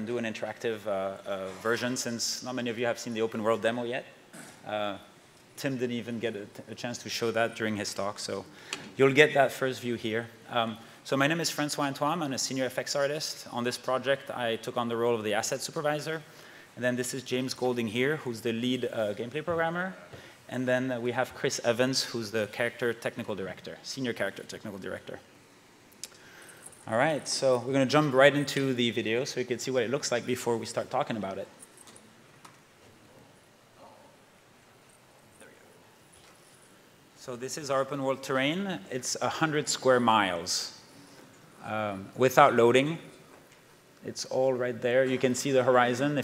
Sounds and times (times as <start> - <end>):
Speech: 0.0 - 25.2, 26.9 - 31.6, 37.2 - 40.8, 41.6 - 43.1, 44.0 - 46.2.